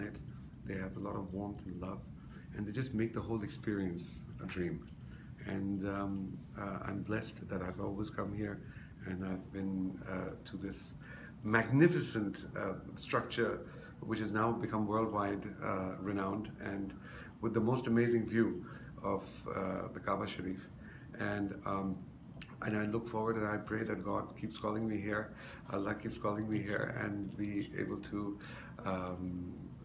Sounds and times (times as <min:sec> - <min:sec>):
Speech: 0:00.0 - 0:29.8.